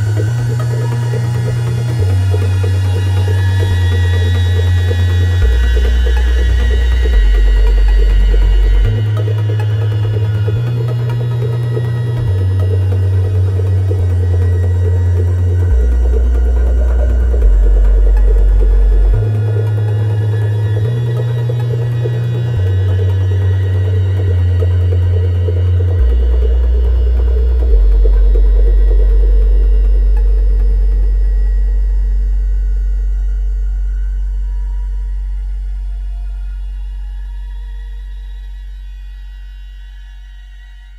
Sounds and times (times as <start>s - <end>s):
Techno: 0.0s - 40.9s.